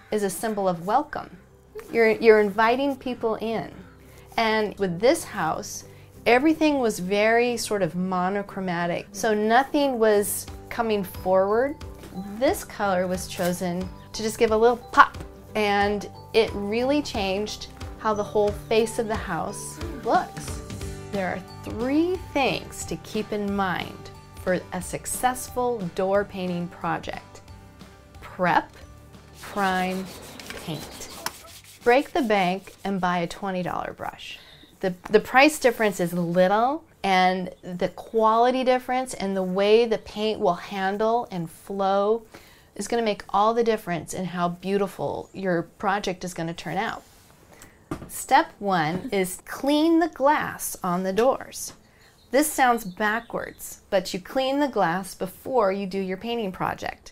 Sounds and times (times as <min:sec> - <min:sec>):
Music: 0:00.0 - 0:35.0
Speech: 0:00.1 - 0:03.8, 0:04.4 - 0:20.6, 0:21.2 - 0:27.3, 0:28.3 - 0:28.7, 0:29.5 - 0:31.0, 0:31.8 - 0:42.2, 0:42.8 - 0:47.0, 0:48.1 - 0:51.8, 0:52.4 - 0:57.1.